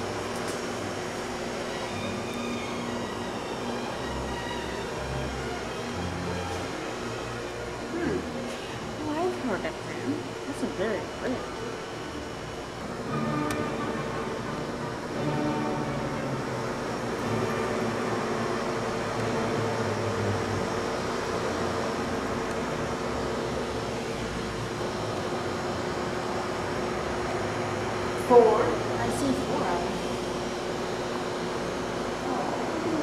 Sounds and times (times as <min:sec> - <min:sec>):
Speech: 0:09.0 - 0:11.4, 0:28.2 - 0:30.0.